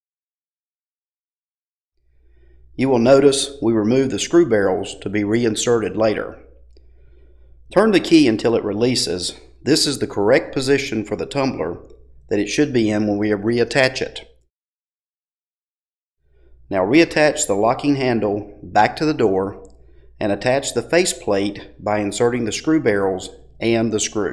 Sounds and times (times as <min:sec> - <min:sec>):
Speech: 0:02.8 - 0:06.5, 0:07.7 - 0:14.3, 0:16.7 - 0:24.3.